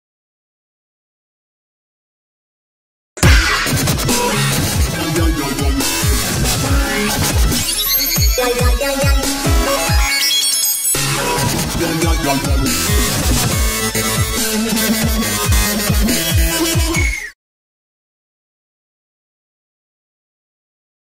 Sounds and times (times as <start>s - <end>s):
Dubstep: 3.2s - 17.3s.